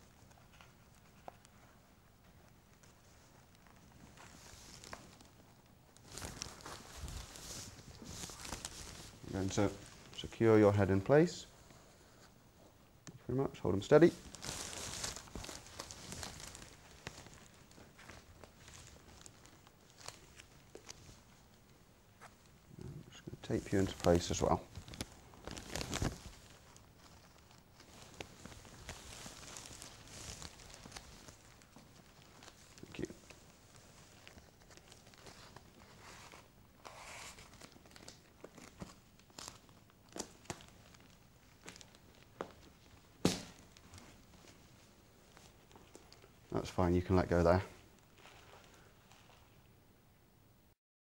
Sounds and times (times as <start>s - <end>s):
Inside, small room: 0.0s - 50.8s
Speech: 9.3s - 11.5s, 13.2s - 14.2s, 22.8s - 24.7s, 32.8s - 33.2s, 46.5s - 47.8s.